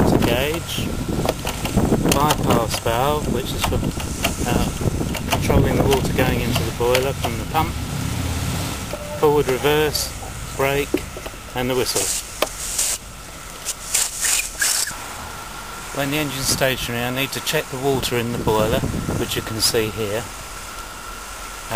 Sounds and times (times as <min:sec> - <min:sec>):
Speech: 0:00.0 - 0:01.0, 0:02.1 - 0:03.8, 0:04.4 - 0:07.8, 0:08.9 - 0:11.0, 0:11.6 - 0:12.2, 0:16.0 - 0:20.3.